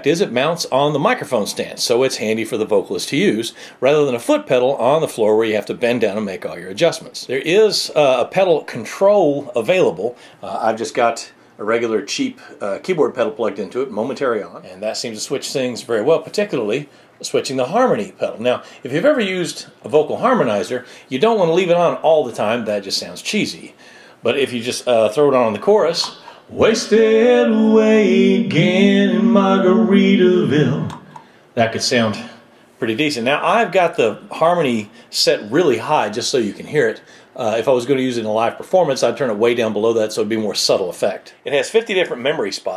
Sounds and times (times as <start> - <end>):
Speech: 0.0 - 31.0, 31.6 - 42.7.